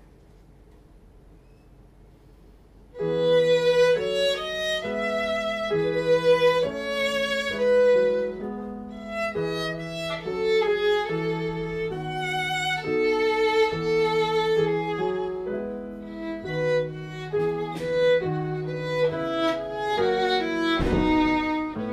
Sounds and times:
Violin, fiddle: 0:03.0 - 0:21.9.

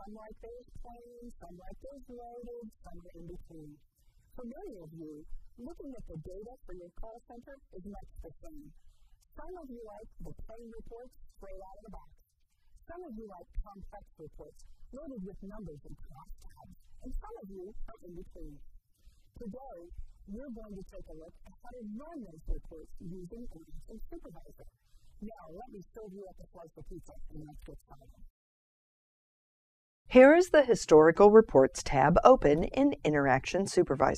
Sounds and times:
Speech: 0:00.0 - 0:03.8, 0:04.4 - 0:08.8, 0:09.4 - 0:12.1, 0:12.9 - 0:18.6, 0:19.4 - 0:28.2, 0:30.1 - 0:34.1.

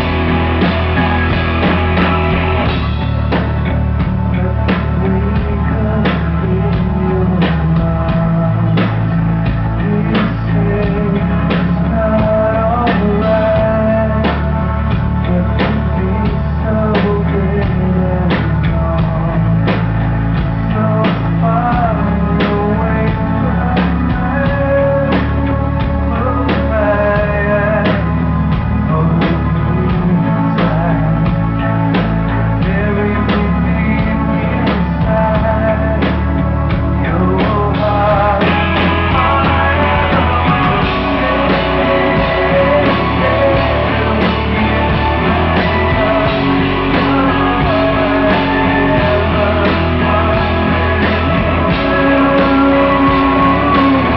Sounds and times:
Music: 0:00.0 - 0:54.1.

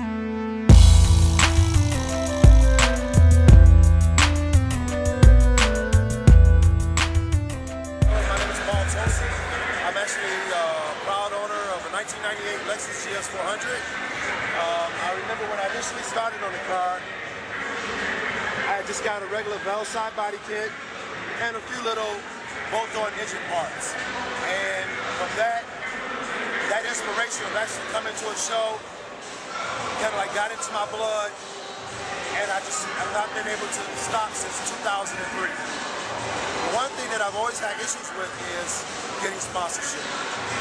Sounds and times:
Music: 0:00.0 - 0:09.9
Speech: 0:08.1 - 0:14.0, 0:14.6 - 0:17.1, 0:18.6 - 0:20.8, 0:21.4 - 0:25.8, 0:26.6 - 0:28.8, 0:29.6 - 0:31.4, 0:32.2 - 0:35.8, 0:36.6 - 0:40.2.

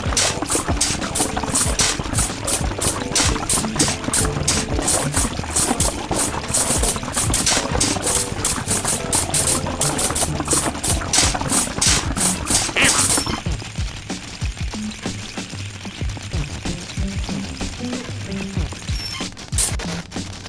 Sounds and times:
Music: 0:00.0 - 0:20.4.

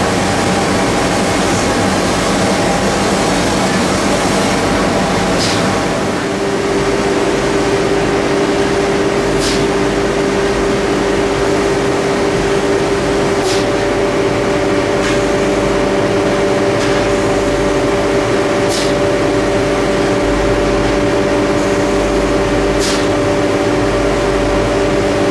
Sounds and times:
Spray: 0:00.1 - 0:06.0, 0:09.2 - 0:09.9, 0:13.3 - 0:13.9, 0:15.0 - 0:15.5, 0:16.7 - 0:17.5, 0:18.6 - 0:19.2, 0:22.8 - 0:23.3.

